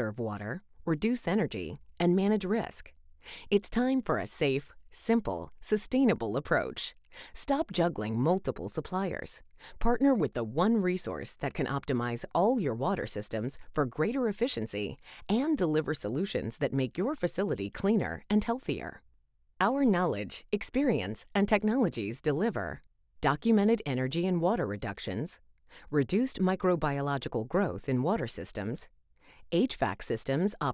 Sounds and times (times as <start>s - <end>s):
Speech: 0.0s - 2.9s, 3.5s - 19.0s, 19.6s - 28.9s, 29.5s - 30.7s.